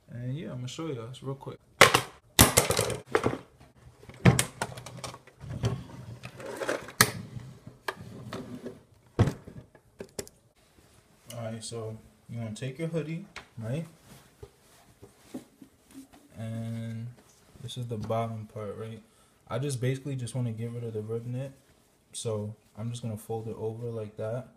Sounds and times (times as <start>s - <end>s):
Speech: 0.0s - 1.6s, 11.3s - 14.0s, 16.3s - 24.5s.